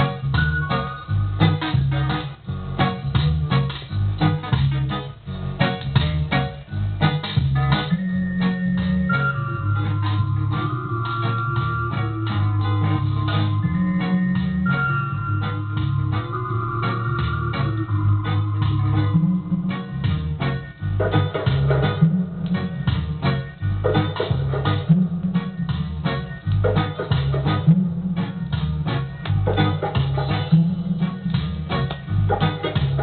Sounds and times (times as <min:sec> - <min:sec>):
Music: 0:00.0 - 0:33.0.